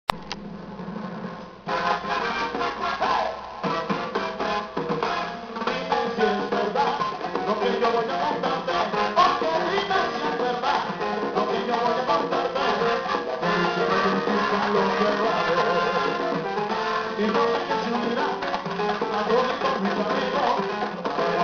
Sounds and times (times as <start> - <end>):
Salsa music: 1.6 - 21.4.